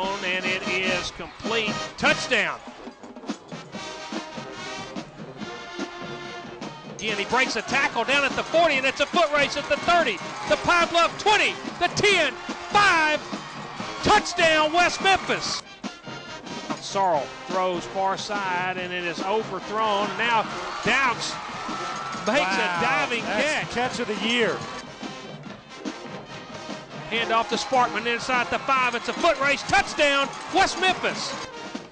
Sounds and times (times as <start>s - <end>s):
Speech: 0.0s - 2.6s, 7.0s - 13.2s, 14.0s - 15.6s, 16.8s - 21.4s, 22.3s - 24.6s, 27.1s - 31.4s
Music: 0.0s - 31.9s.